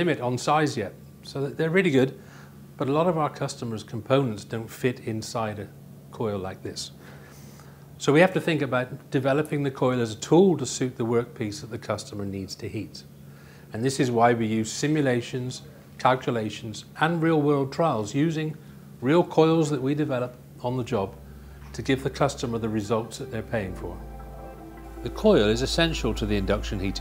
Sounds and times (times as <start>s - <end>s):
Speech: 0.0s - 2.2s, 2.8s - 7.0s, 8.0s - 13.1s, 13.7s - 24.0s, 25.0s - 27.0s.